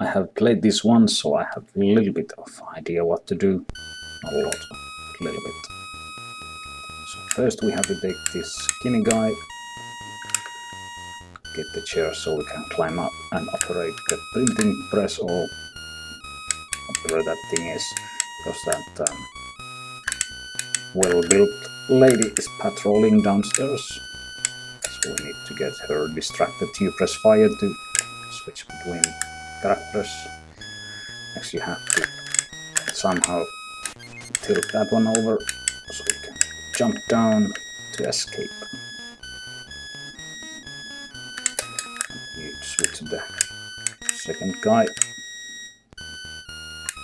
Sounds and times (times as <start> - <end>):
Speech: 0.0 - 3.6, 4.3 - 4.6, 7.1 - 9.4, 11.6 - 15.5, 16.9 - 19.2, 21.0 - 24.0, 24.9 - 30.3, 31.4 - 32.1, 33.0 - 33.5, 34.4 - 38.7, 42.4 - 43.4, 44.2 - 45.0.